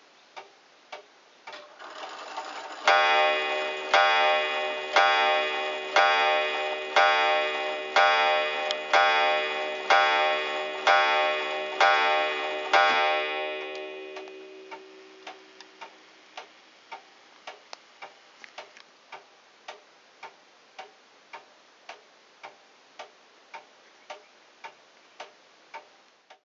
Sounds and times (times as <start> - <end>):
Tick-tock: 0.4 - 26.4
Tick: 8.6 - 8.8, 13.7 - 26.4.